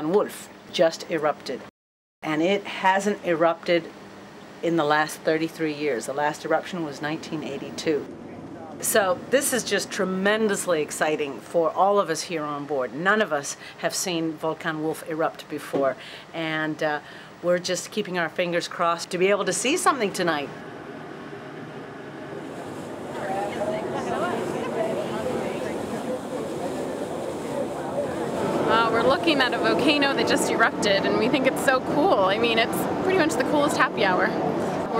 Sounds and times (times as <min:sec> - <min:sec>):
Speech: 0:00.0 - 0:03.9, 0:23.2 - 0:35.0.